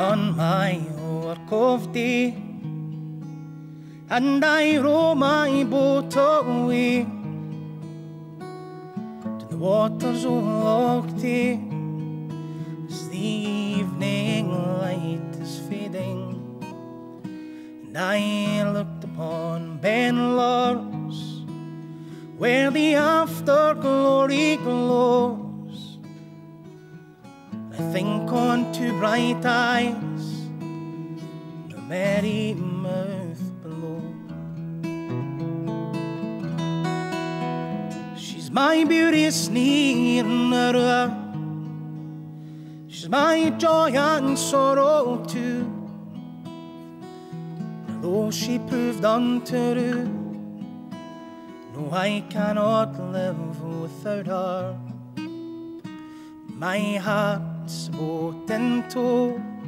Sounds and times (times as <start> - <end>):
Music: 0.0 - 59.6.